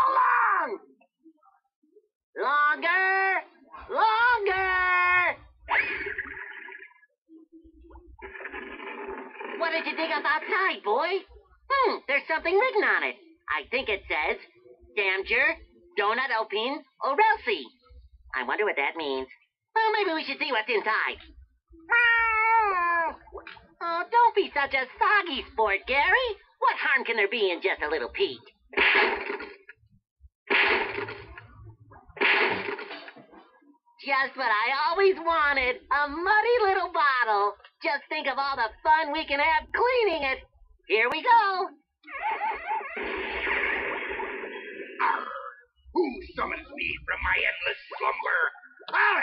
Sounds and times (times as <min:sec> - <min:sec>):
Speech: 0:02.4 - 0:05.6, 0:09.6 - 0:21.3, 0:23.8 - 0:28.5, 0:33.3 - 0:41.8, 0:45.0 - 0:49.2.